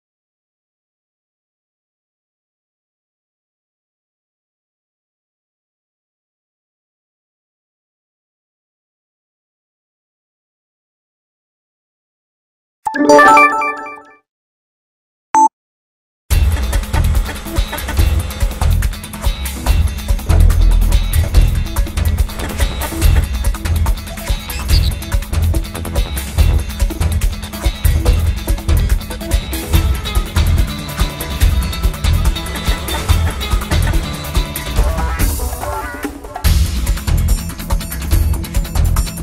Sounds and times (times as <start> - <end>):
Music: 16.3 - 39.2.